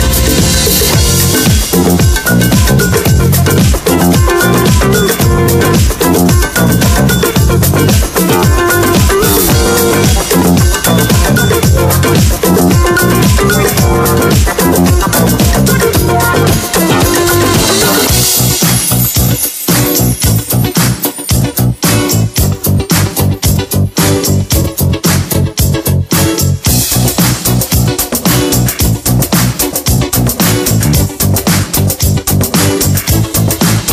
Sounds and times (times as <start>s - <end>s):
Disco: 0.0s - 33.9s
Funk: 0.0s - 33.9s.